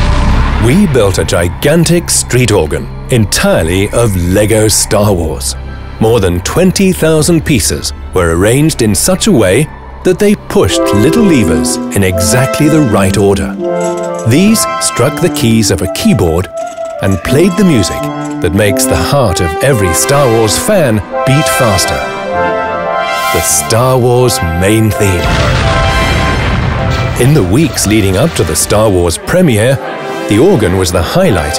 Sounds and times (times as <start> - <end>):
Music: 0.0 - 31.5
Speech: 0.6 - 13.6, 14.3 - 22.1, 23.3 - 25.3, 27.2 - 31.5
Rattle: 13.6 - 14.3, 15.9 - 17.1, 17.9 - 18.4.